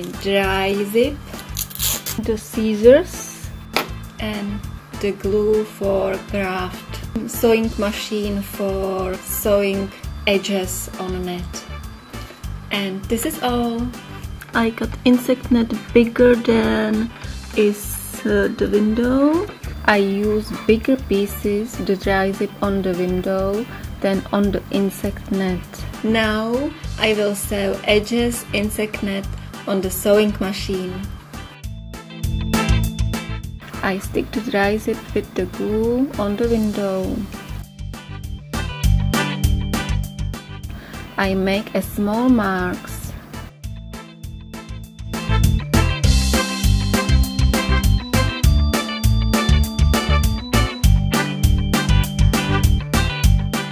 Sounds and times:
Speech: 0.0 - 1.2, 2.2 - 3.5, 4.2 - 11.6, 12.7 - 31.1, 33.8 - 37.3, 41.2 - 43.2
Music: 0.0 - 53.7.

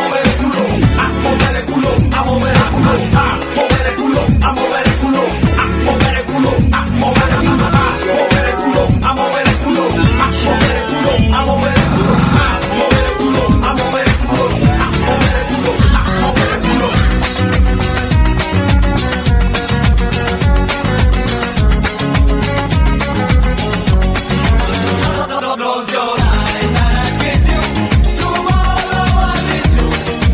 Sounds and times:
Music: 0.0 - 30.3.

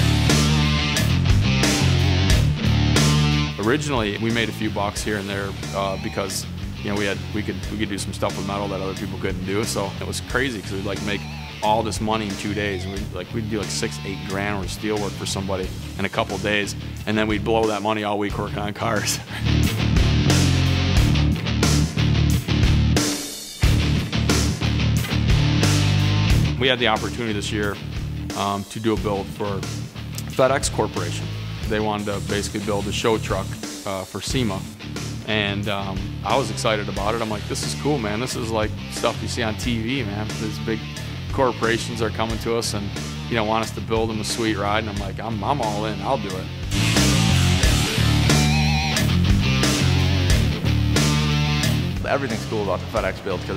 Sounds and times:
Music: 0.0 - 53.5
Speech: 3.6 - 19.3, 26.6 - 46.5, 52.0 - 53.5.

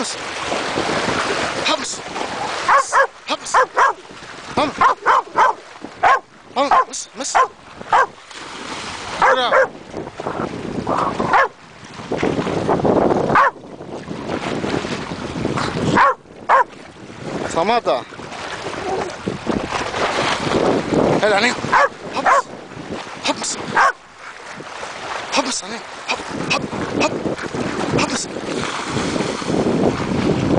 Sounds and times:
Stream: 0.0 - 30.5
Speech: 1.6 - 2.0, 6.6 - 7.4, 17.5 - 18.1, 21.2 - 22.4, 23.2 - 23.6, 25.3 - 27.2, 28.0 - 28.3.

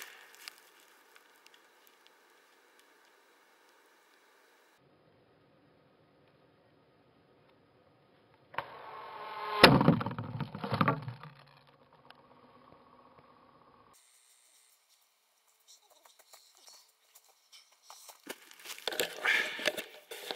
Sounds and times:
Arrow: 8.6 - 11.4.

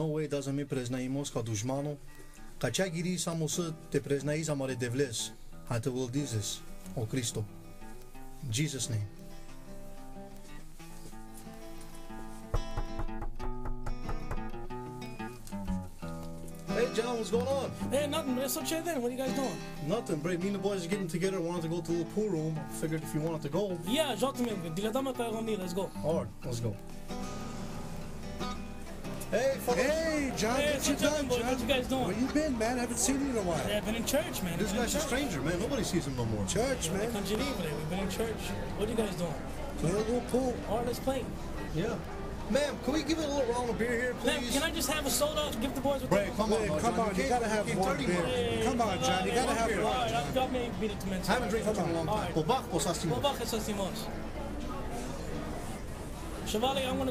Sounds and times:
Speech: 0.0 - 2.0, 2.6 - 7.5, 8.4 - 9.1, 16.7 - 26.8, 29.3 - 55.1, 56.4 - 57.1
Music: 0.0 - 57.1.

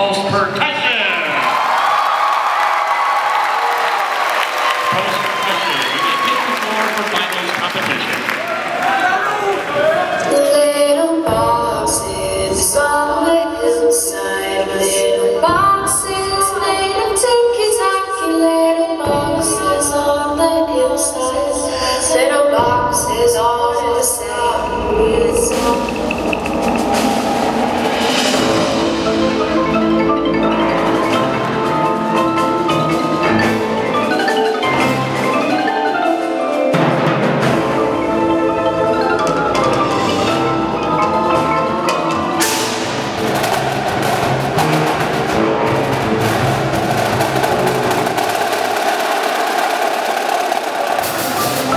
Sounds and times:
Marimba, xylophone: 24.7 - 43.4.

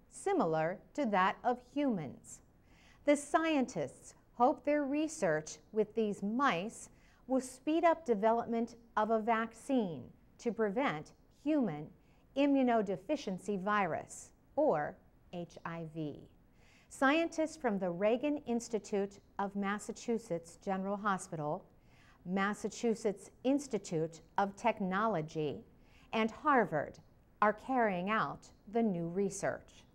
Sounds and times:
Speech: 0.2 - 2.4, 3.1 - 16.3, 17.0 - 21.6, 22.3 - 25.6, 26.2 - 29.9.

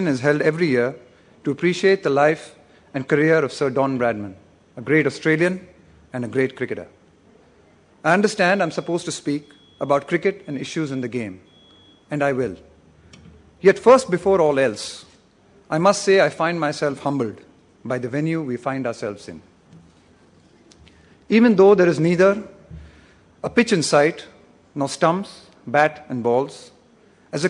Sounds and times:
Male speech, man speaking: 0.0 - 7.0, 8.0 - 11.4, 12.1 - 12.7, 13.6 - 15.1, 15.7 - 19.5, 21.3 - 22.6, 23.4 - 26.8
Narration, monologue: 0.0 - 27.4.

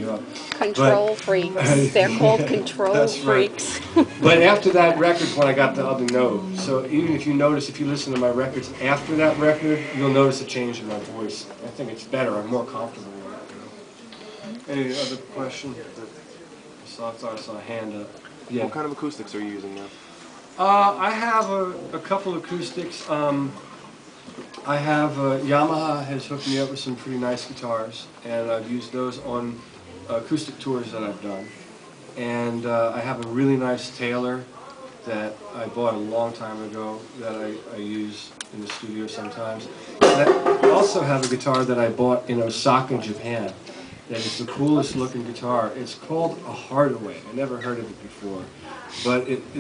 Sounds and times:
Speech: 0.0 - 13.8, 14.5 - 19.9, 24.7 - 31.5, 35.1 - 49.6.

